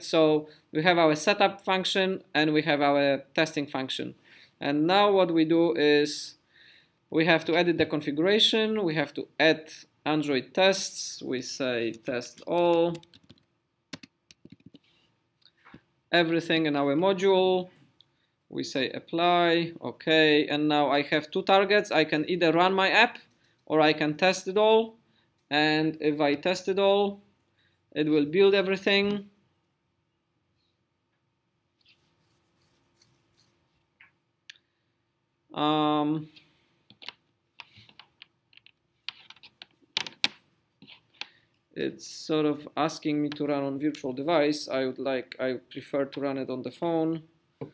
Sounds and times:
Speech: 0.0 - 6.4, 7.1 - 13.0, 16.1 - 17.7, 18.5 - 27.2, 28.0 - 29.3, 35.5 - 36.4, 41.8 - 47.3.

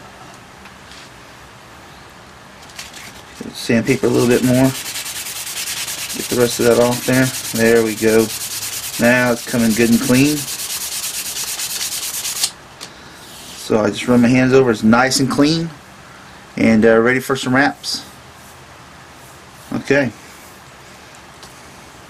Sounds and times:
Rub: 4.0 - 12.5
Sanding: 4.0 - 12.5.

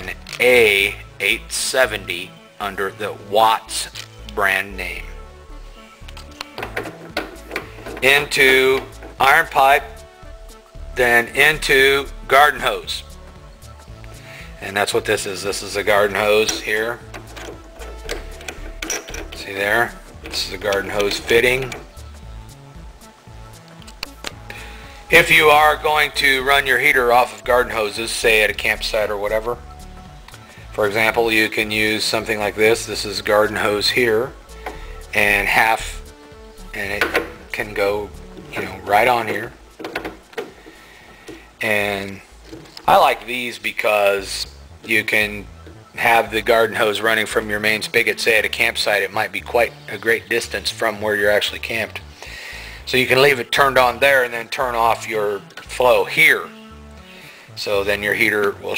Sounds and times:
Speech: 0.0 - 5.1, 8.0 - 10.0, 11.0 - 13.1, 14.6 - 17.0, 19.4 - 21.8, 25.1 - 29.6, 30.8 - 34.4, 35.1 - 36.0, 36.7 - 39.6, 41.6 - 42.2, 42.9 - 52.0, 52.9 - 56.5, 57.6 - 58.7
Music: 0.0 - 58.7.

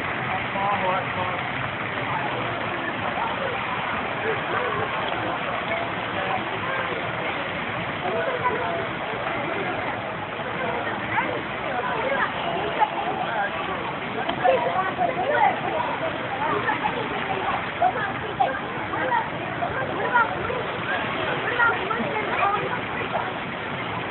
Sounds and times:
Speech: 0.0 - 24.1.

